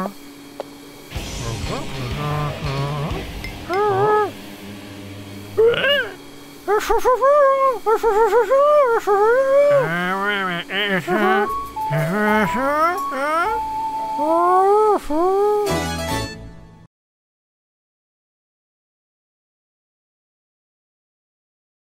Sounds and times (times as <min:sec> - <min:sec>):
Music for children: 0:11.2 - 0:14.4, 0:15.6 - 0:16.8.